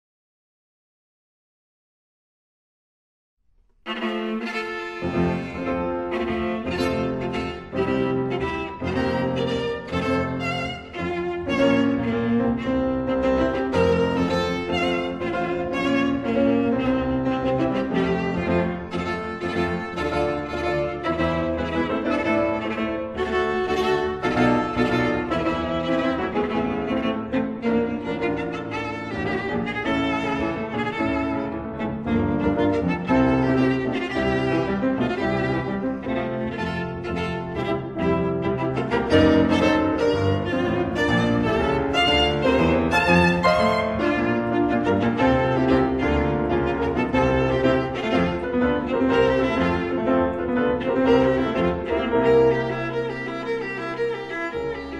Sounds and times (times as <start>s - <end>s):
Violin, fiddle: 3.8s - 54.9s.